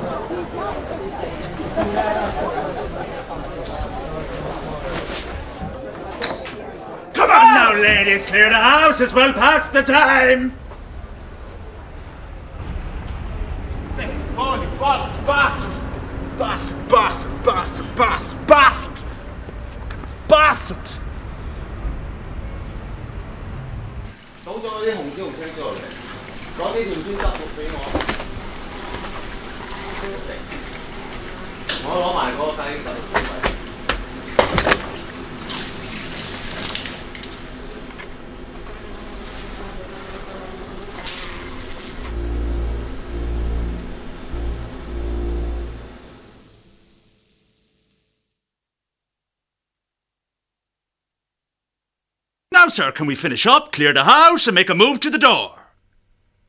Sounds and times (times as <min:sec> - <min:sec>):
Speech: 0:00.0 - 0:10.6, 0:14.0 - 0:19.0, 0:20.3 - 0:21.0, 0:24.5 - 0:26.0, 0:26.6 - 0:28.1, 0:31.8 - 0:33.5, 0:52.5 - 0:55.8.